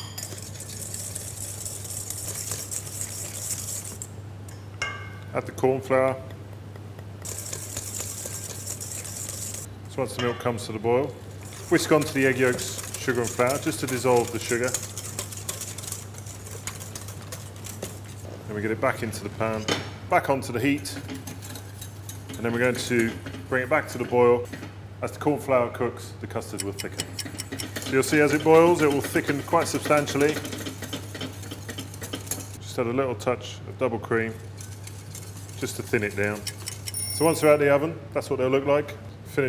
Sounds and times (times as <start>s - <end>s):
Speech: 5.3s - 6.3s, 9.9s - 14.8s, 18.5s - 21.1s, 22.4s - 27.0s, 27.9s - 30.4s, 32.6s - 34.4s, 35.6s - 36.5s, 37.2s - 39.4s.